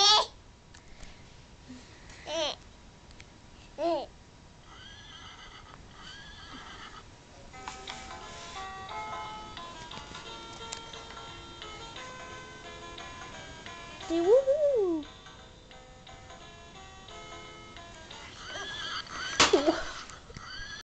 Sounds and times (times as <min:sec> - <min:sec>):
Neigh, whinny: 0:04.6 - 0:07.1, 0:18.4 - 0:20.8
Music: 0:07.5 - 0:20.0
Speech: 0:14.1 - 0:15.0.